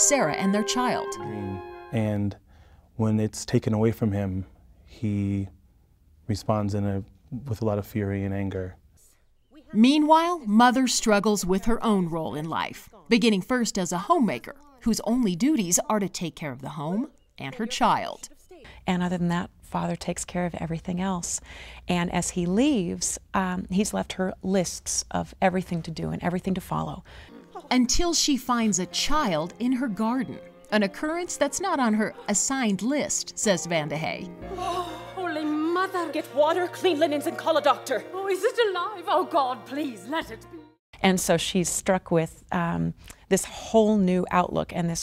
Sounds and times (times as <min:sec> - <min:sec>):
Conversation: 0:00.0 - 0:45.0.